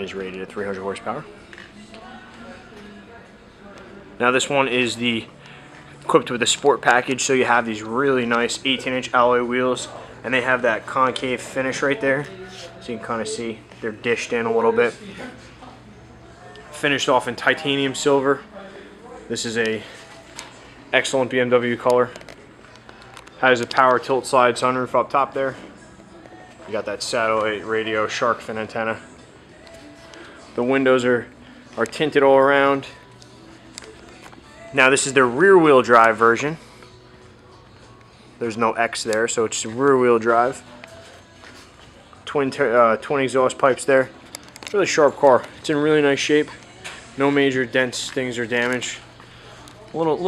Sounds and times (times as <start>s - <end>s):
Speech: 0.0s - 5.3s, 6.0s - 15.5s, 16.5s - 20.0s, 20.9s - 22.2s, 23.4s - 25.7s, 26.6s - 29.0s, 30.6s - 33.0s, 34.7s - 36.6s, 38.4s - 40.7s, 42.2s - 44.1s, 44.7s - 46.6s, 47.2s - 50.2s.